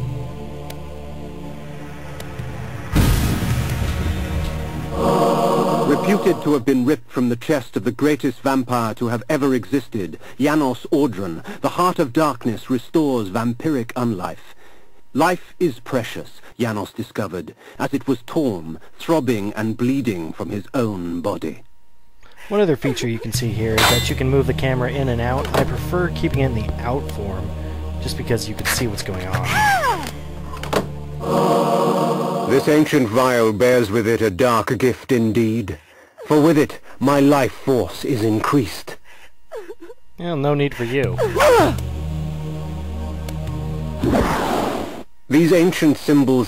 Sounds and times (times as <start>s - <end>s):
Music: 0.0s - 7.0s, 23.2s - 33.8s, 41.1s - 45.1s
Speech: 5.9s - 14.5s, 15.2s - 21.7s, 22.4s - 30.0s, 32.5s - 39.0s, 40.2s - 41.8s, 45.3s - 46.4s.